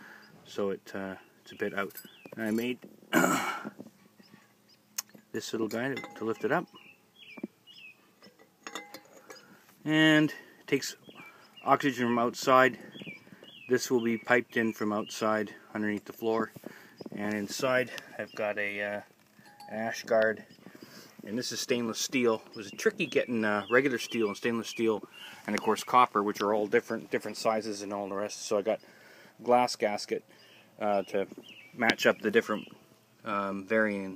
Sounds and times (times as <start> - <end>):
Speech: 0.5 - 2.8, 5.4 - 6.7, 9.8 - 11.0, 11.6 - 12.8, 13.7 - 16.5, 17.2 - 19.1, 19.7 - 20.4, 21.3 - 28.8, 29.4 - 30.2, 30.8 - 34.1.